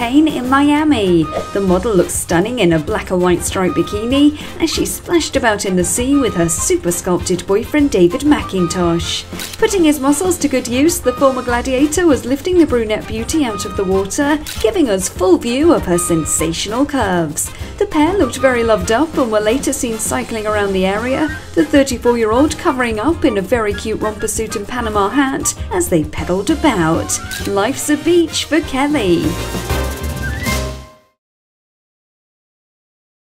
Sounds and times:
Speech: 0.0 - 29.4
Music: 0.0 - 31.2.

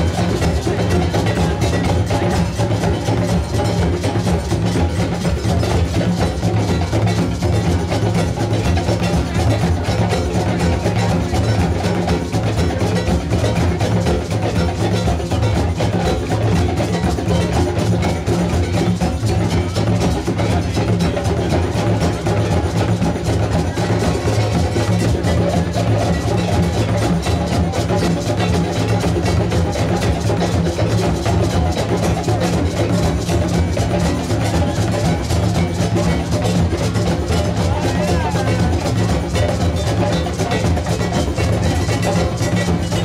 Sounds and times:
Bass drum: 0.0 - 43.0.

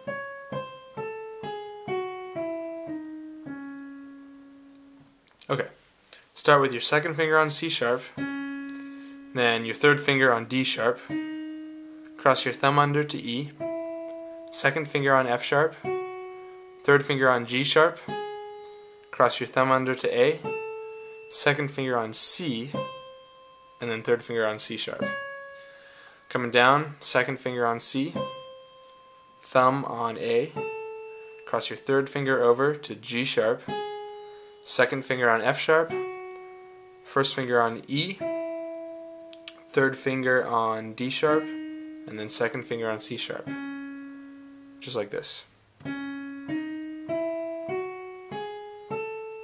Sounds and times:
Music: 0.0 - 5.3, 6.5 - 49.4
Speech: 5.4 - 5.8, 6.4 - 8.2, 9.4 - 11.2, 12.2 - 13.6, 14.5 - 15.9, 16.9 - 18.1, 19.2 - 20.5, 21.3 - 22.8, 23.8 - 25.1, 26.3 - 28.2, 29.4 - 30.6, 31.5 - 33.7, 34.6 - 36.0, 37.1 - 38.2, 39.6 - 41.5, 42.1 - 43.5, 44.8 - 45.5.

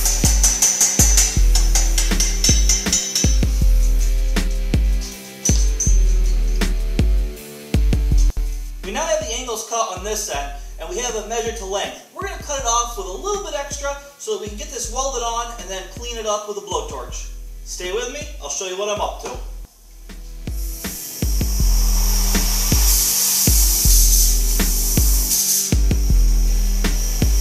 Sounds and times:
Music: 0.0 - 27.4
Speech: 8.8 - 19.5.

